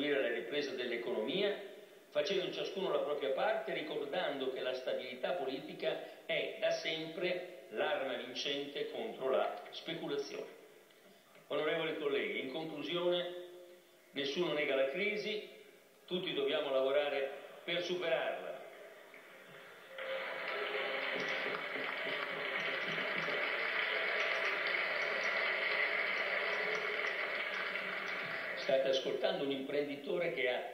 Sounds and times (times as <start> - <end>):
Speech: 0.0 - 10.6, 11.5 - 13.4, 14.2 - 15.5, 16.1 - 18.8, 28.6 - 30.7.